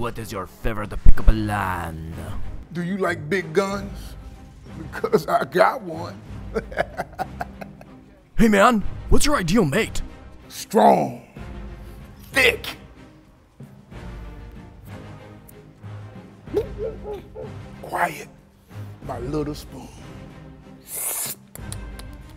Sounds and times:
Speech: 0:00.0 - 0:04.1, 0:05.0 - 0:06.2, 0:08.4 - 0:11.3, 0:19.0 - 0:20.0
Music: 0:00.0 - 0:22.3.

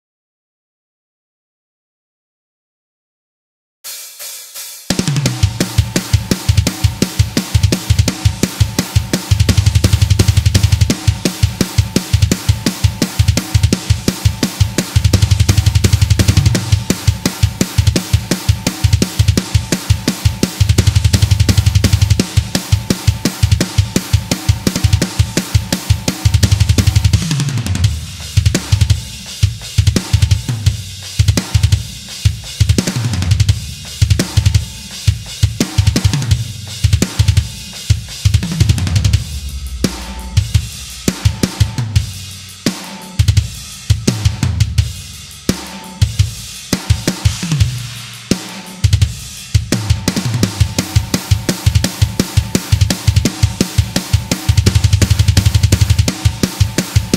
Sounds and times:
Hi-hat: 0:03.9 - 0:27.2, 0:27.9 - 0:57.1
Drum: 0:03.9 - 0:57.1
Heavy metal: 0:03.9 - 0:57.1.

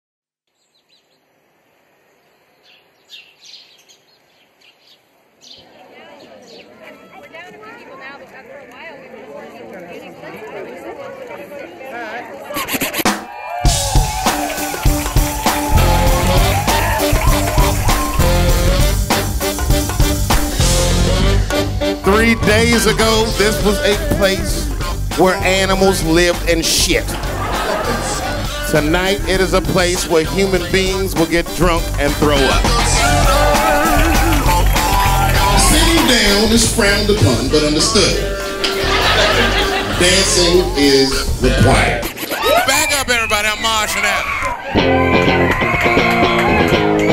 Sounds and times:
Chirp, tweet: 0:00.5 - 0:01.2, 0:02.2 - 0:05.7.

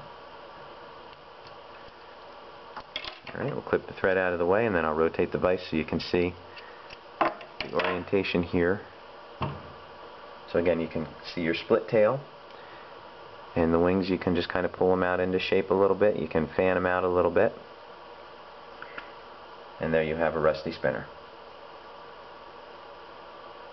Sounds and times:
Speech: 0:03.3 - 0:06.4, 0:07.7 - 0:08.9, 0:10.5 - 0:12.3, 0:13.6 - 0:17.6, 0:19.8 - 0:21.2.

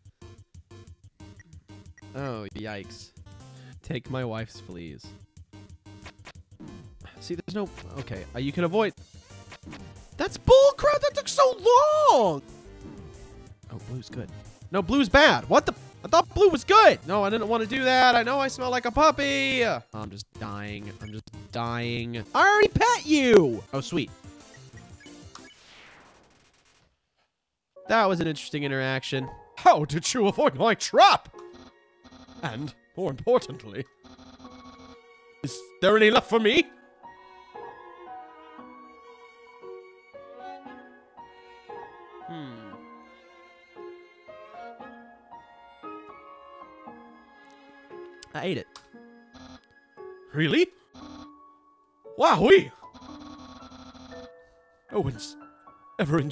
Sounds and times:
Music: 0:00.0 - 0:25.7, 0:27.8 - 0:56.3
Speech: 0:02.2 - 0:03.1, 0:03.9 - 0:05.1, 0:07.2 - 0:08.9, 0:10.2 - 0:12.4, 0:13.7 - 0:24.1, 0:27.9 - 0:31.3, 0:32.4 - 0:33.8, 0:35.5 - 0:36.7, 0:48.3 - 0:48.7, 0:50.4 - 0:50.7, 0:52.2 - 0:52.8, 0:54.9 - 0:55.4, 0:56.0 - 0:56.3.

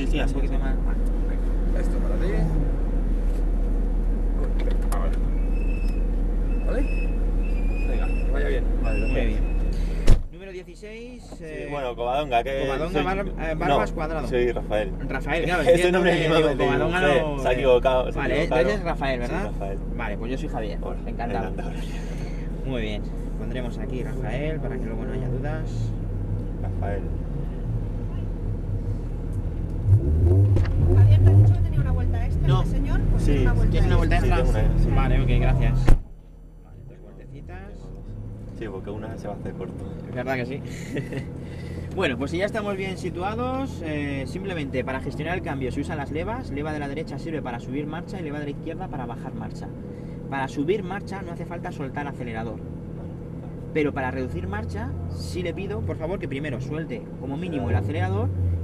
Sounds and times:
Speech: 0:07.9 - 0:09.4, 0:10.4 - 0:21.9, 0:22.6 - 0:26.0, 0:31.0 - 0:36.0, 0:38.6 - 0:40.6, 0:42.0 - 0:49.7, 0:50.3 - 0:52.6, 0:53.7 - 0:58.3.

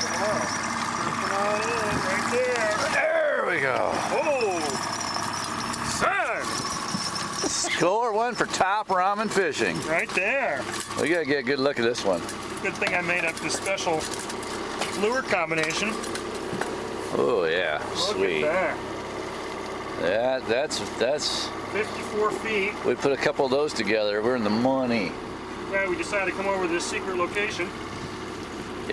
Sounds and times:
Outside, rural or natural: 0:00.0 - 0:28.9
Speech: 0:20.0 - 0:27.8.

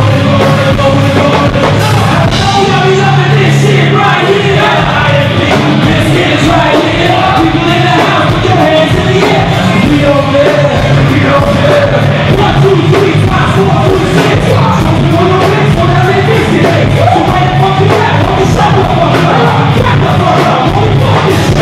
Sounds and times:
Inside, large room or hall: 0:00.0 - 0:21.6
Music: 0:00.0 - 0:21.6
Singing: 0:00.0 - 0:21.6.

